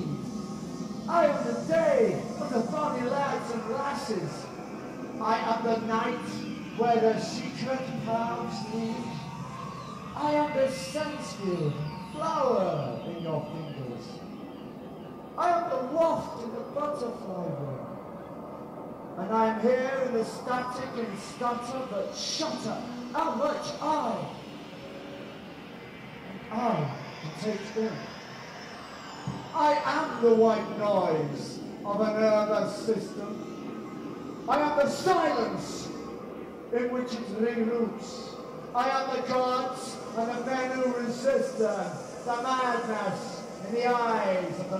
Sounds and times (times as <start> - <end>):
Speech: 1.1 - 4.5, 5.2 - 9.3, 10.2 - 14.2, 15.4 - 17.8, 19.2 - 24.4, 26.5 - 28.1, 29.6 - 33.4, 34.5 - 36.0, 36.7 - 44.8.